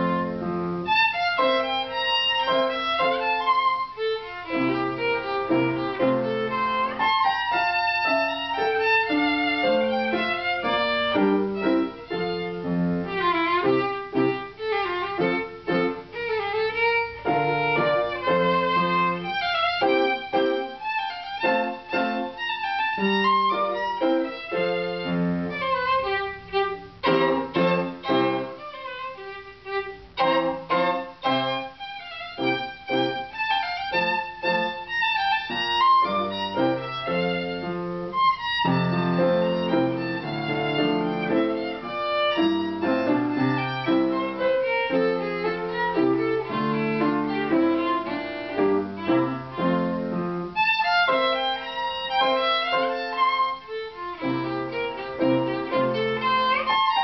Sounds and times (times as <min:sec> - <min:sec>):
Violin, fiddle: 0:00.0 - 0:57.0.